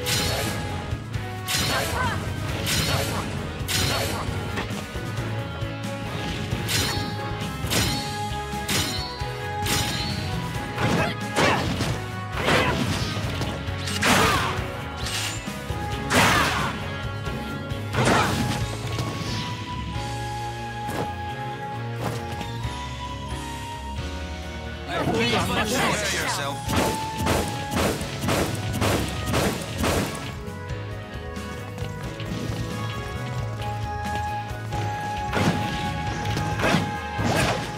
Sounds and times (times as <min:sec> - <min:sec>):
Music: 0:00.0 - 0:37.7
Speech: 0:24.9 - 0:26.7.